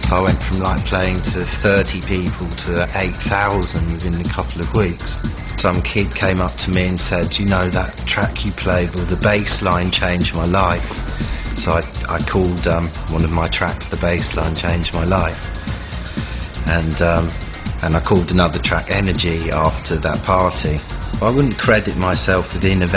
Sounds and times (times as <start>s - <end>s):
Speech: 0.0s - 11.0s, 11.6s - 15.4s, 16.6s - 22.9s
Music: 0.0s - 22.9s.